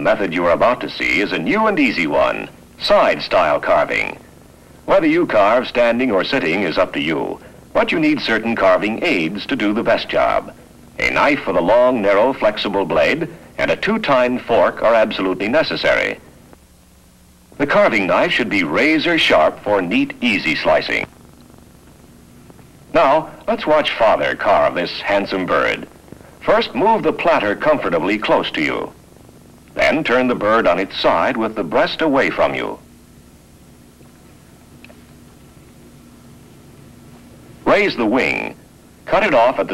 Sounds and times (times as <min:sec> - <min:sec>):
Speech: 0:00.0 - 0:04.3, 0:04.9 - 0:16.3, 0:17.6 - 0:21.1, 0:22.9 - 0:29.0, 0:29.8 - 0:32.8, 0:37.6 - 0:39.7.